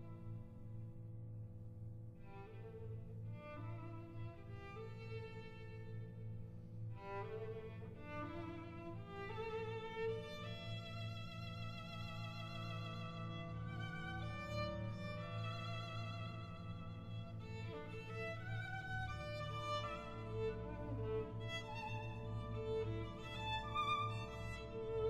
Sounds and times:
Violin, fiddle: 7.0s - 25.0s.

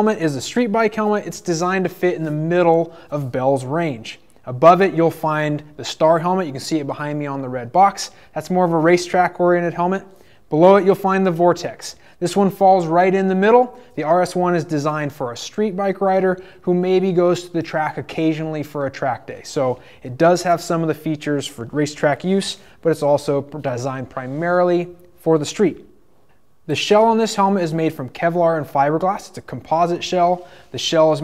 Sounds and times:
Speech: 0.0s - 25.9s, 26.7s - 31.2s.

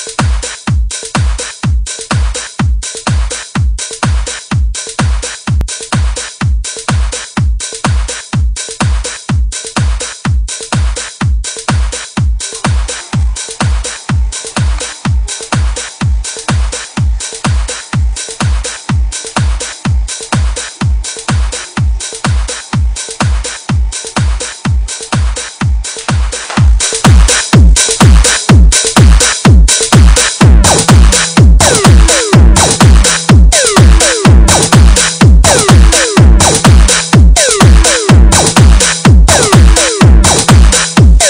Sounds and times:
Disco: 0.0s - 41.3s
Rhythm and blues: 0.0s - 41.3s.

